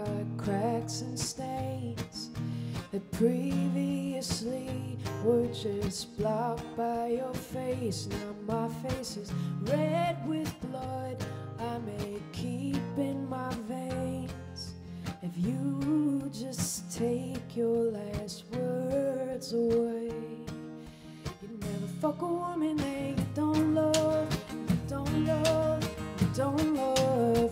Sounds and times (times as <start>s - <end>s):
Music: 0.0s - 27.5s.